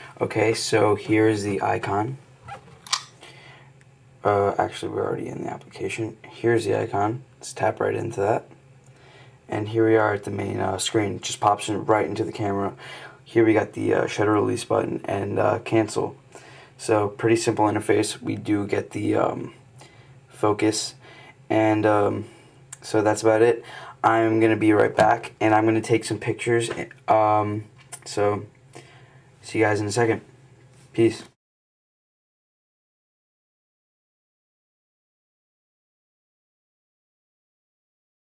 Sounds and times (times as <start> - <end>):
Speech: 0.0 - 2.2, 4.2 - 8.6, 9.5 - 16.2, 16.8 - 19.6, 20.3 - 28.5, 29.4 - 30.3, 31.0 - 31.4.